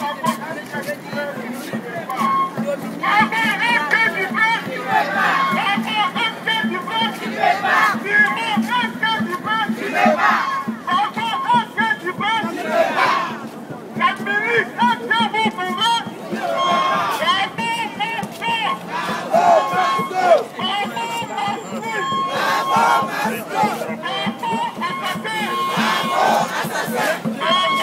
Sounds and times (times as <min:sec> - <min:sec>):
Speech: 0:00.0 - 0:10.1, 0:13.9 - 0:16.1, 0:19.4 - 0:22.3
Music: 0:24.0 - 0:27.8.